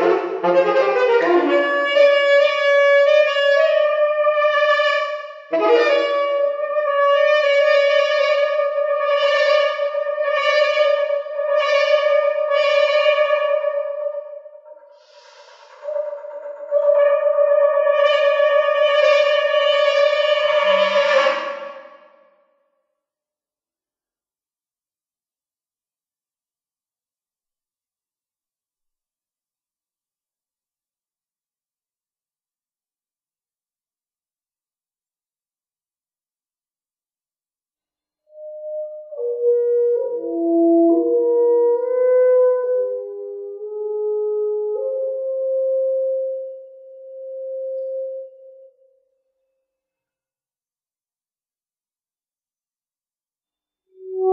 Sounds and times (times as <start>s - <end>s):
Saxophone: 0.0s - 22.2s, 38.3s - 48.7s, 53.9s - 54.3s.